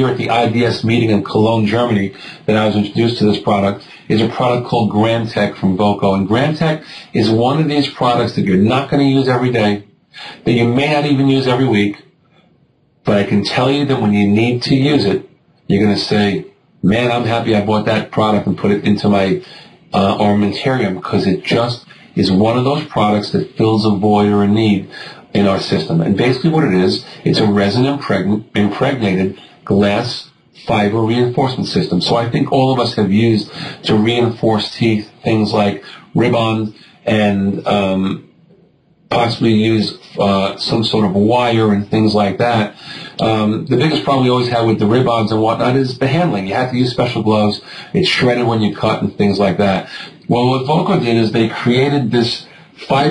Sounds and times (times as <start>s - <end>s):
Speech: 0.0s - 12.1s, 13.0s - 53.1s.